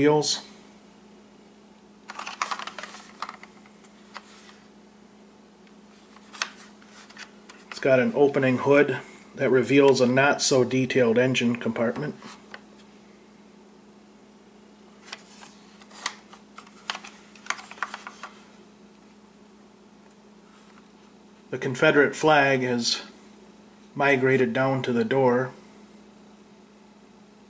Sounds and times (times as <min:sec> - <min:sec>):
Speech: 0:00.0 - 0:00.5, 0:07.8 - 0:12.2, 0:21.5 - 0:23.2, 0:24.0 - 0:25.6.